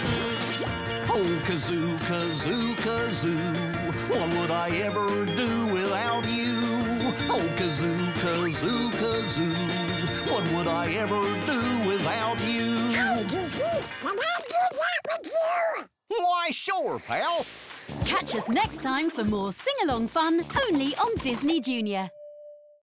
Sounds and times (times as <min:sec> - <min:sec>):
Music: 0:00.0 - 0:14.3, 0:17.8 - 0:22.8
Speech: 0:13.0 - 0:17.5, 0:18.1 - 0:22.1.